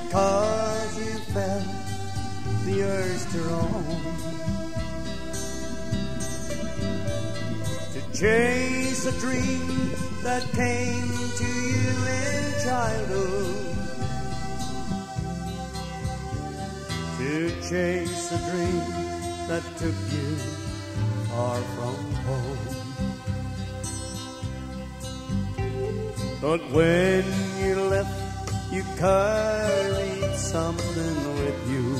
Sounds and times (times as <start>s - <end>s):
Music: 0.0s - 31.9s.